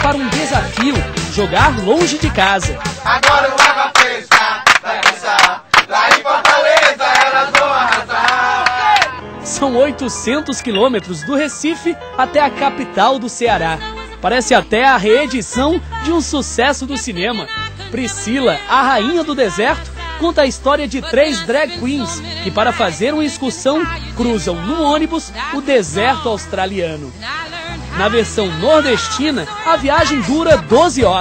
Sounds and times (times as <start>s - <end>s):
Speech: 0.0s - 3.0s, 9.5s - 31.2s
Music: 0.0s - 31.2s.